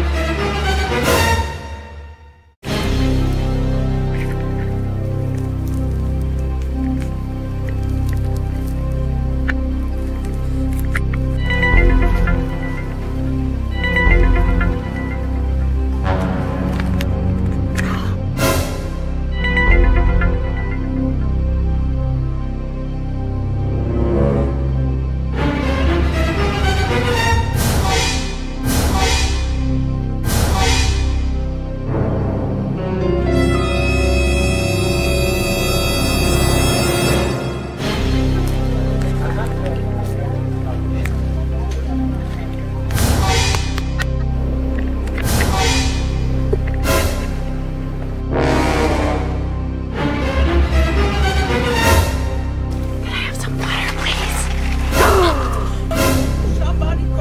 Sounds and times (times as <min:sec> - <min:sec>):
Music: 0:00.0 - 0:57.2
Outside, rural or natural: 0:00.0 - 0:57.2.